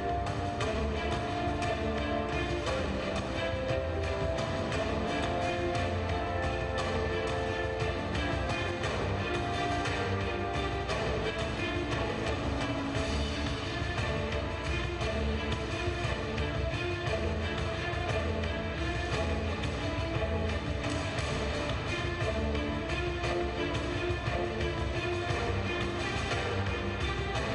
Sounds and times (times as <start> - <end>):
Music: 0.0 - 27.5.